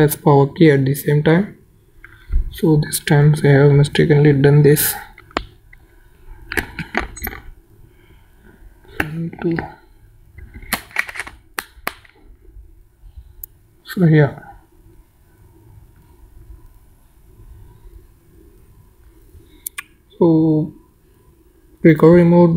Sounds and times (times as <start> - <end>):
Speech: 0.0 - 1.6, 2.5 - 5.2, 9.0 - 9.8, 13.8 - 14.6, 20.1 - 20.8, 21.8 - 22.5.